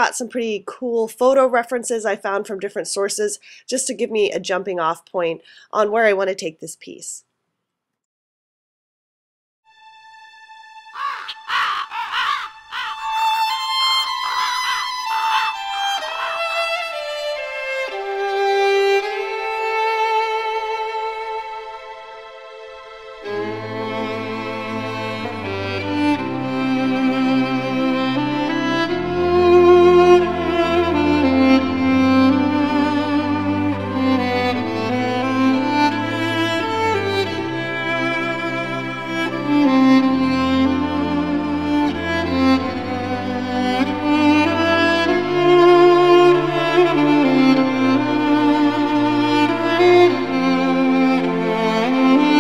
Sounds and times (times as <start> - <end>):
Cello: 12.2 - 52.4.